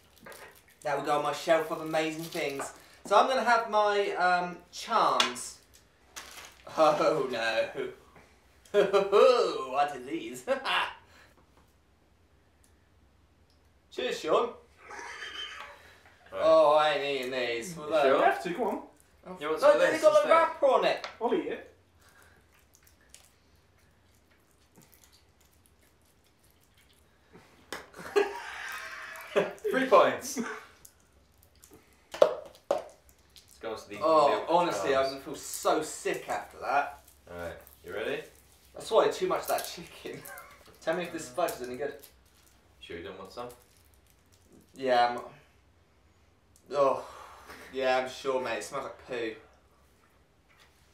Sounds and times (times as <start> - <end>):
Inside, small room: 0.0 - 50.9.